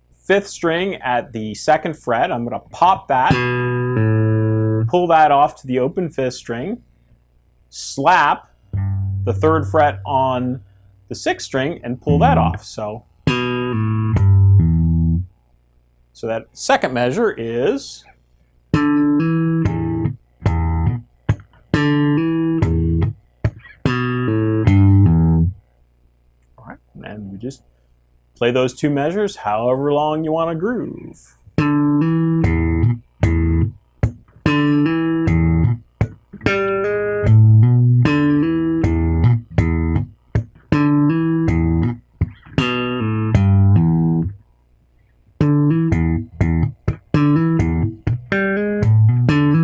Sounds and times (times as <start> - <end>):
Electronic tuner: 2.4 - 5.8, 7.7 - 15.6, 18.0 - 25.8, 31.4 - 49.6
Electric guitar: 3.2 - 4.9, 12.0 - 15.3, 18.7 - 25.6, 31.5 - 44.4, 45.4 - 49.6.